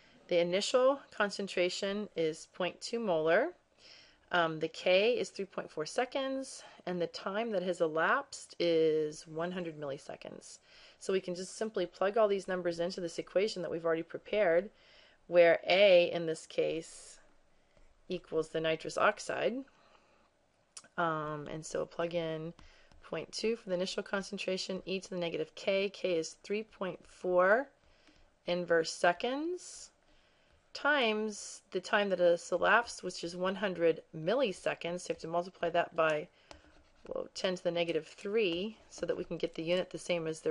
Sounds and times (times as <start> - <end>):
Narration, monologue: 0.0 - 40.5.